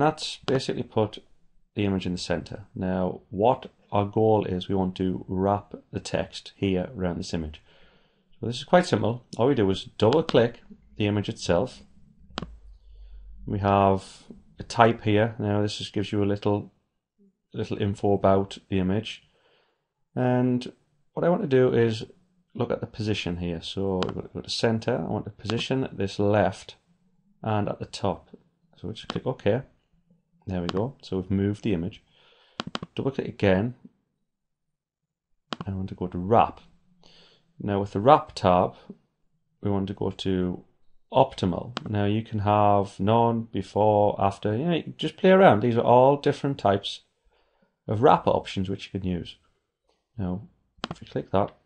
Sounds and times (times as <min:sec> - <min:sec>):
Speech: 0:00.0 - 0:07.7, 0:08.4 - 0:11.8, 0:13.4 - 0:16.7, 0:17.6 - 0:19.3, 0:20.2 - 0:26.8, 0:27.4 - 0:29.7, 0:30.5 - 0:32.1, 0:32.9 - 0:33.9, 0:35.6 - 0:36.7, 0:37.6 - 0:39.0, 0:39.6 - 0:47.1, 0:47.9 - 0:49.4, 0:50.2 - 0:51.6.